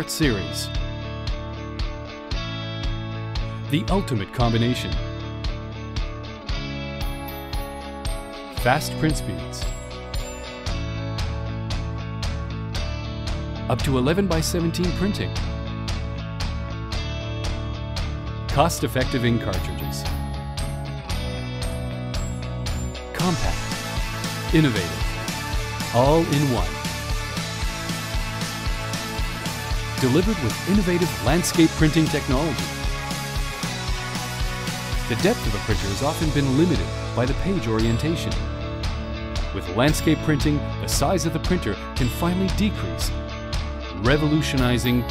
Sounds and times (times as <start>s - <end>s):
Speech: 0.0s - 0.8s, 3.7s - 5.0s, 8.6s - 9.7s, 13.7s - 15.4s, 18.5s - 20.1s, 23.2s - 23.7s, 24.5s - 25.1s, 25.9s - 26.8s, 30.0s - 32.7s, 35.1s - 38.4s, 39.6s - 43.2s, 44.0s - 45.1s
Music: 0.0s - 45.1s.